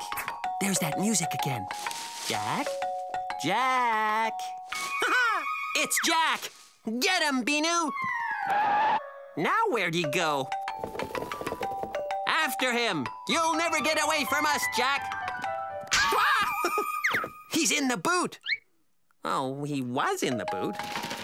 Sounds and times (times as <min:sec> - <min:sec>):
Music: 0:00.0 - 0:05.2, 0:09.2 - 0:17.6, 0:20.2 - 0:21.2
Speech: 0:00.6 - 0:01.7, 0:02.3 - 0:02.7, 0:03.4 - 0:04.5, 0:05.8 - 0:08.0, 0:09.4 - 0:10.5, 0:12.3 - 0:15.0, 0:19.2 - 0:20.8.